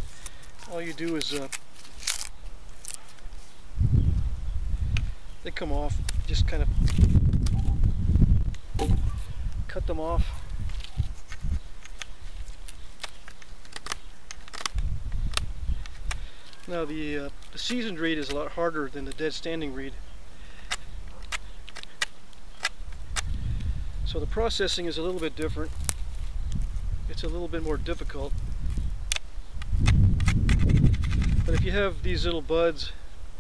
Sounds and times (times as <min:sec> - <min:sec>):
Speech: 0:00.6 - 0:01.5, 0:05.4 - 0:06.7, 0:09.7 - 0:10.3, 0:16.7 - 0:20.0, 0:24.1 - 0:25.7, 0:27.1 - 0:28.4, 0:31.5 - 0:33.0.